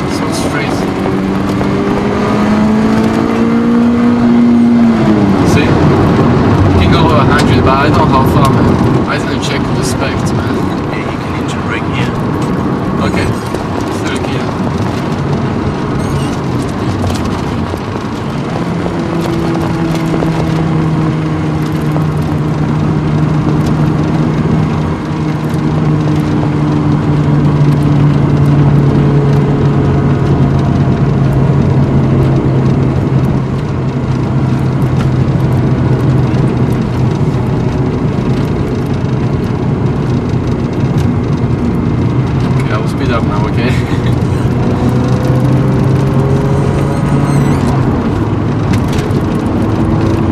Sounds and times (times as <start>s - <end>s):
Speech: 0.1s - 0.9s, 6.8s - 12.2s, 13.0s - 13.4s, 14.0s - 14.5s, 42.6s - 43.9s.